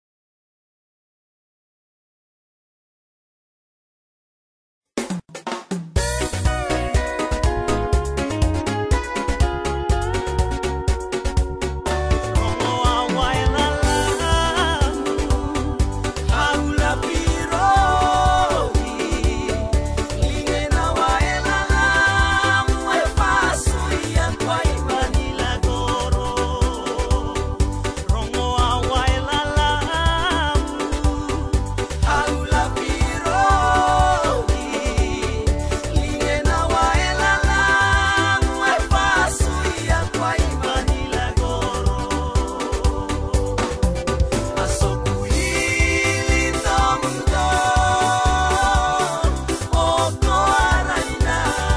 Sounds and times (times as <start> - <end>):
Music: 5.0 - 51.7.